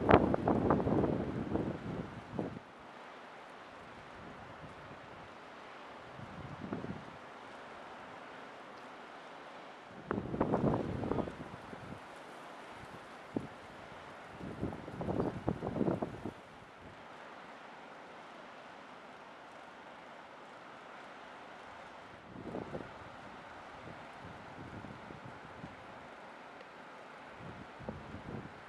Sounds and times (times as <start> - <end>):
Sailboat, sailing ship: 0.0 - 28.6.